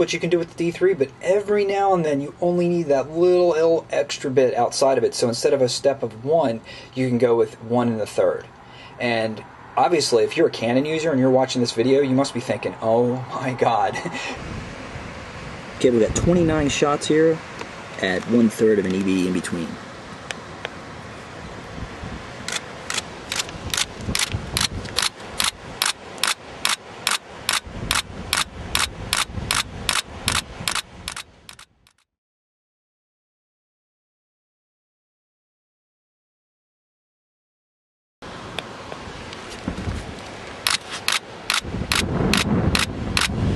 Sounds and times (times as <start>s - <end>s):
Outside, rural or natural: 0.0s - 32.2s, 38.2s - 43.5s.